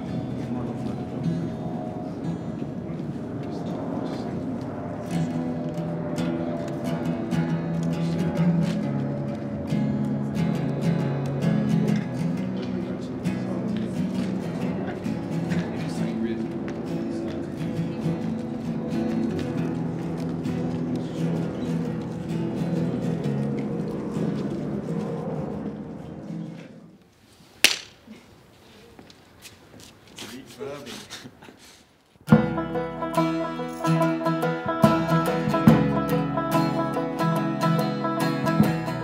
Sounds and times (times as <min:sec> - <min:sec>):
Speech: 0:00.0 - 0:05.4, 0:11.9 - 0:19.9, 0:20.6 - 0:22.1, 0:30.2 - 0:31.3
Music: 0:06.2 - 0:16.0, 0:17.6 - 0:23.7, 0:32.3 - 0:39.0.